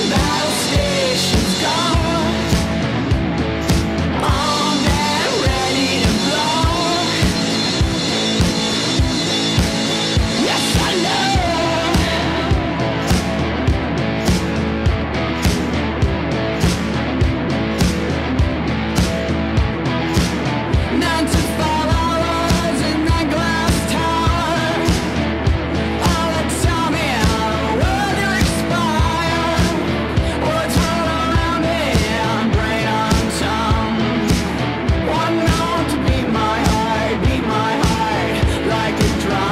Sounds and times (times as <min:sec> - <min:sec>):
Pop music: 0:00.0 - 0:03.0, 0:03.7 - 0:14.6, 0:20.1 - 0:25.3, 0:25.9 - 0:39.5.